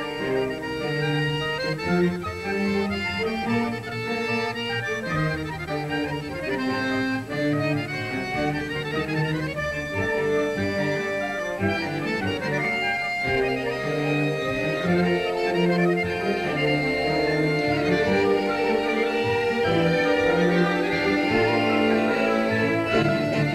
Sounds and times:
Accordion: 0:00.0 - 0:23.5
Orchestra: 0:00.0 - 0:23.5.

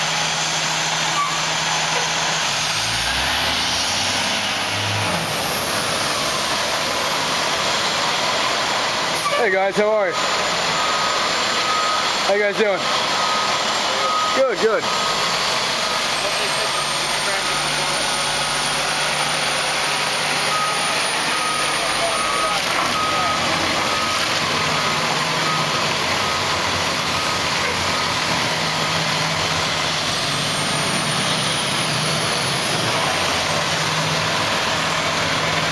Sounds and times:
Heavy engine (low frequency): 0:00.0 - 0:35.7
Truck: 0:00.0 - 0:35.7.

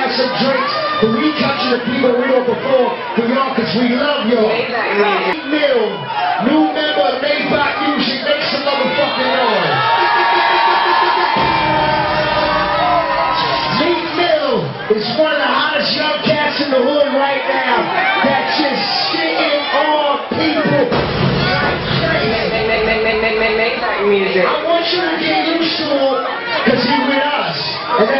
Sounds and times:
Speech: 0:00.0 - 0:09.8, 0:13.7 - 0:22.6, 0:23.6 - 0:28.1
Music: 0:09.8 - 0:14.2, 0:20.9 - 0:24.0.

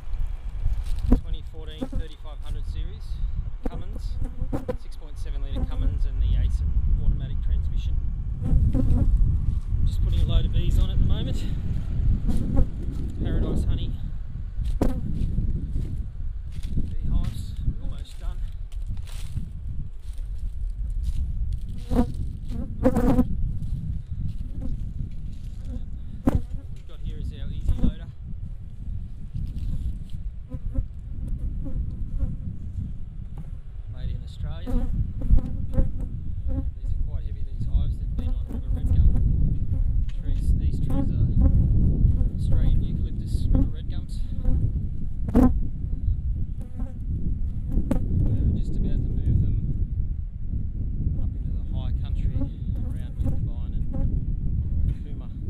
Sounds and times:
Speech: 0:01.2 - 0:04.2, 0:04.8 - 0:07.9, 0:09.9 - 0:11.6, 0:13.2 - 0:14.0, 0:16.9 - 0:18.5, 0:26.8 - 0:28.1, 0:34.0 - 0:34.8, 0:36.8 - 0:39.1, 0:40.1 - 0:41.3, 0:42.4 - 0:44.3, 0:48.3 - 0:49.7, 0:51.2 - 0:53.8, 0:54.9 - 0:55.4.

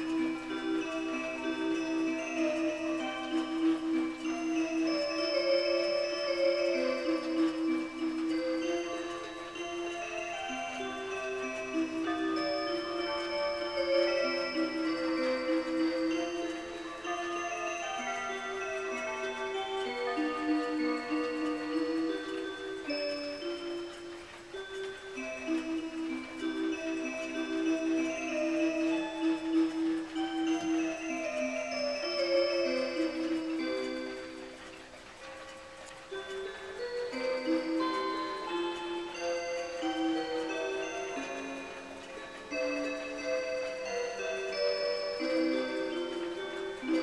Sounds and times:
Music: 0:00.0 - 0:47.0.

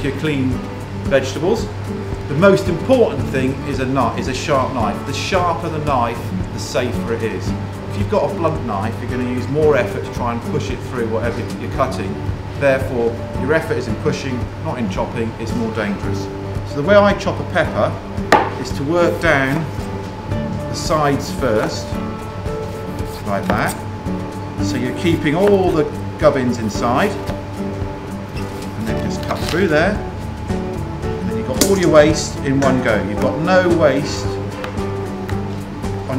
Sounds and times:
Speech: 0:00.0 - 0:01.7, 0:02.3 - 0:18.0, 0:18.6 - 0:19.7, 0:20.7 - 0:22.0, 0:23.2 - 0:23.8, 0:24.6 - 0:27.2, 0:28.8 - 0:30.0, 0:31.3 - 0:34.4
Music: 0:00.0 - 0:36.1.

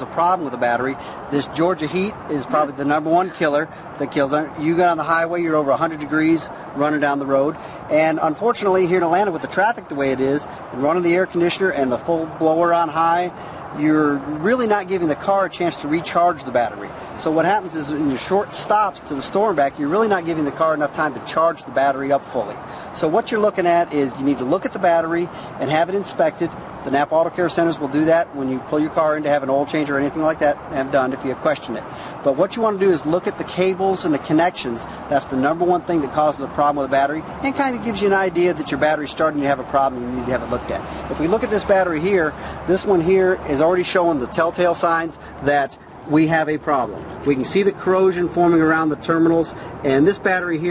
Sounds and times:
Speech: 0:00.0 - 0:50.7.

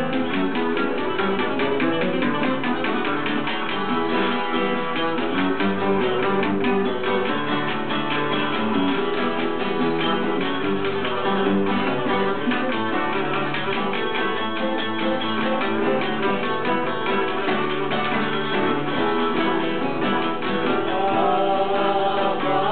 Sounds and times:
Music: 0:00.0 - 0:22.7.

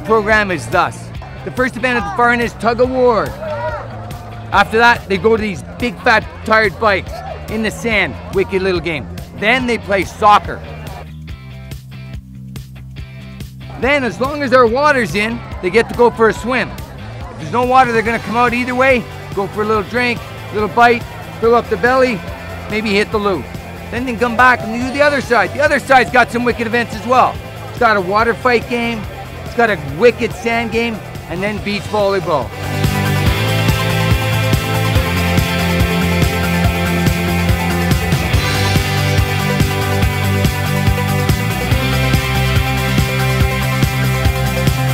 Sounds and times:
Speech: 0:00.0 - 0:03.8, 0:04.5 - 0:10.7, 0:13.7 - 0:16.8, 0:17.4 - 0:32.5
Music: 0:00.0 - 0:44.9.

